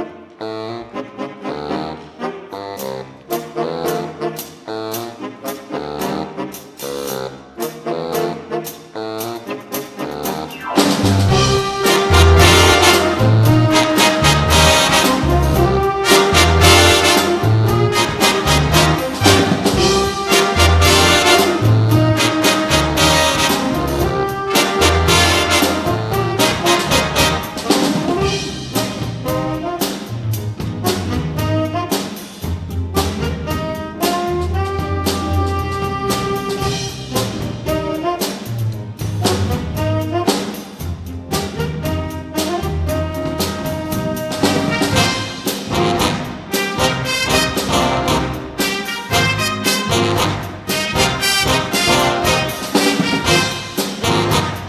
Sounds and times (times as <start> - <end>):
Music: 0.0 - 54.6.